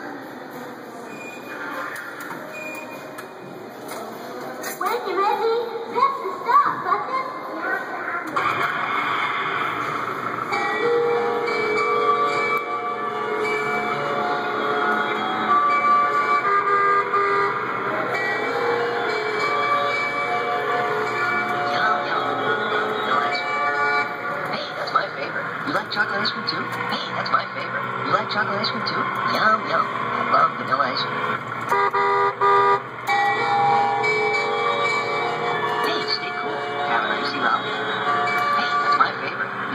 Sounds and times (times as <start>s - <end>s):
Music: 0.0s - 25.5s, 33.1s - 39.7s
Vehicle: 7.8s - 39.7s.